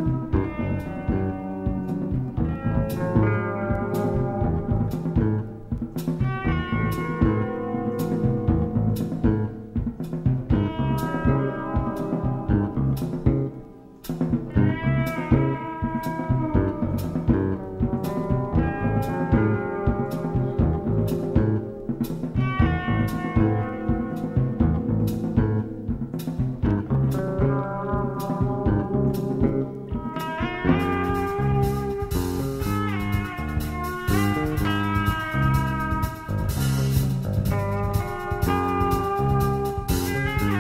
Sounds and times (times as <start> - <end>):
Music: 0.0 - 40.6.